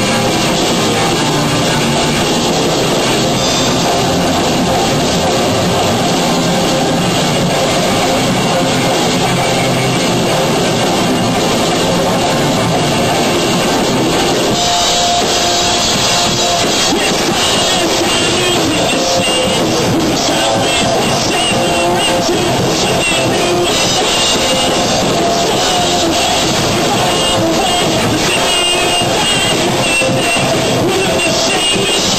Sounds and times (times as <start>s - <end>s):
Music: 0.0s - 32.1s.